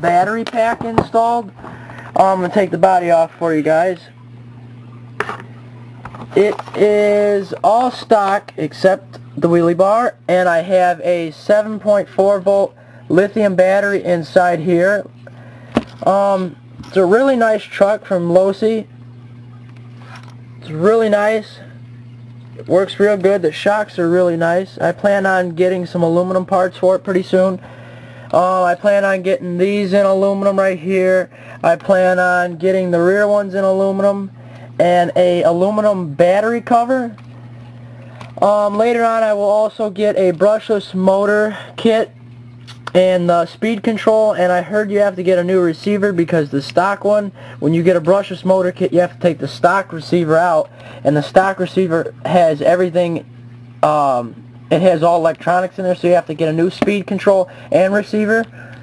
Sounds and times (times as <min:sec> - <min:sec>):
Speech: 0:00.0 - 0:01.5, 0:02.2 - 0:04.2, 0:06.4 - 0:15.1, 0:16.0 - 0:18.9, 0:20.6 - 0:21.8, 0:22.6 - 0:27.6, 0:28.3 - 0:37.2, 0:38.4 - 0:42.2, 0:42.9 - 0:58.5.